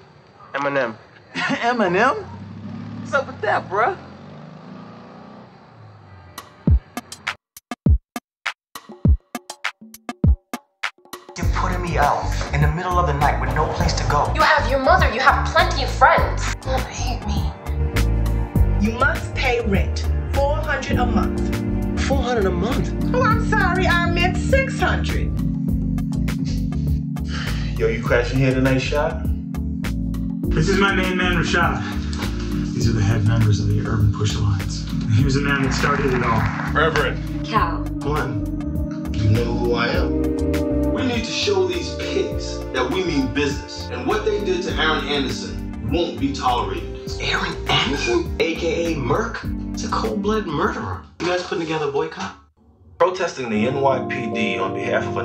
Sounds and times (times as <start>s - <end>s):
Music: 6.3s - 52.3s, 53.0s - 55.2s
Speech: 11.4s - 17.5s, 27.8s - 29.2s, 30.5s - 32.0s, 32.8s - 38.4s, 39.2s - 40.1s, 41.0s - 52.4s, 53.0s - 55.2s.